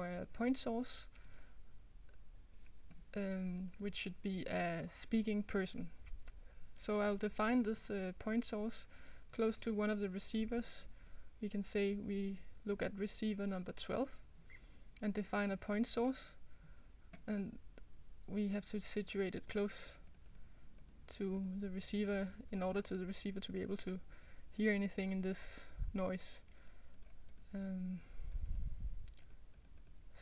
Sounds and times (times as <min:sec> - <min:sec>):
Narration, monologue: 0:00.0 - 0:30.2.